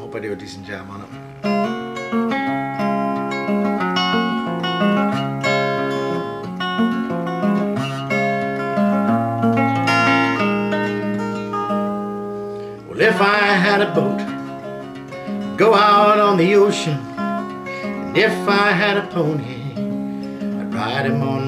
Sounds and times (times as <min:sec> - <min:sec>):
Music: 0:00.0 - 0:21.4.